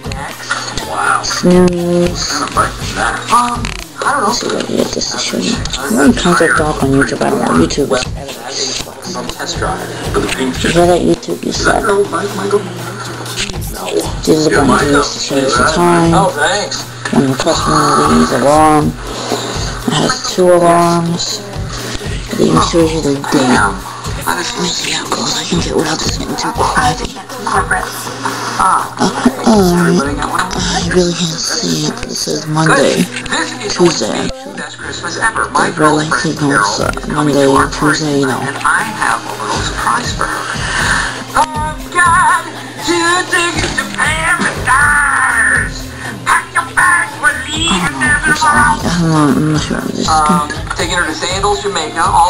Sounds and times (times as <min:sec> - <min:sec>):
Speech: 0:00.0 - 0:19.0, 0:22.3 - 0:28.2, 0:28.8 - 0:40.4, 0:41.4 - 0:52.3
Music: 0:00.0 - 0:52.3.